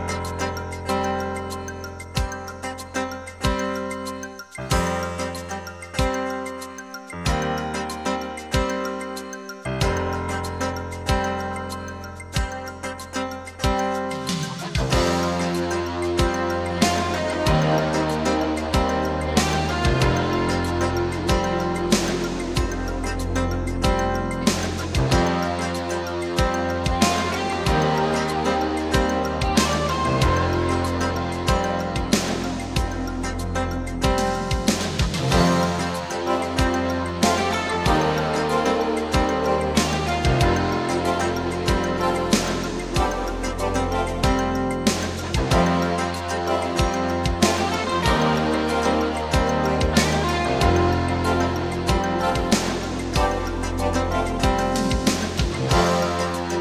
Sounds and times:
Music: 0.0s - 56.6s.

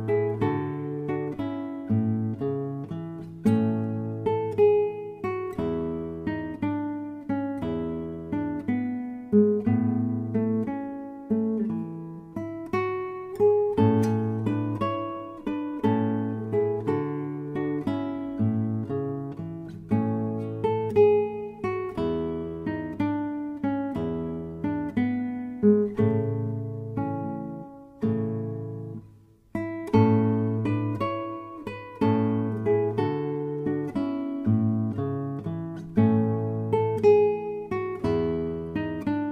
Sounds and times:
Guitar: 0.0s - 39.3s.

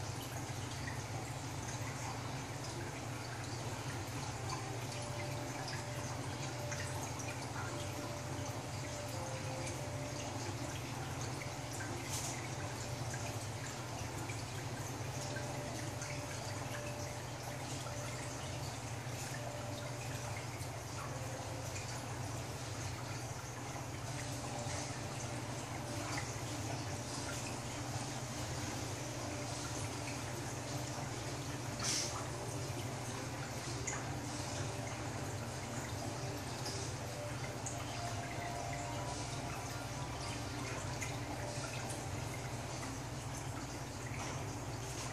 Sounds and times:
Music: 0.0s - 45.1s.

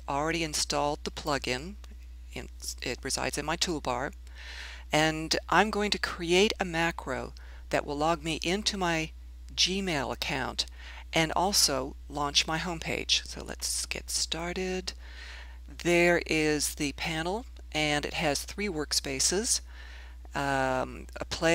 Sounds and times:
Speech: 0.1s - 1.8s, 2.4s - 4.2s, 5.0s - 15.0s, 15.8s - 19.6s, 20.4s - 21.5s.

